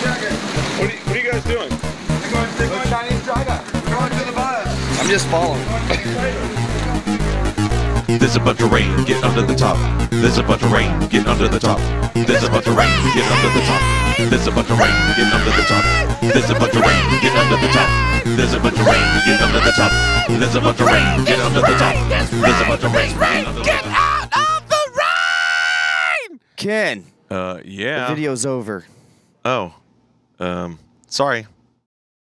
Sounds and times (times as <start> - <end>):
Music: 0.0 - 24.8
Speech: 26.6 - 28.9, 30.4 - 31.6.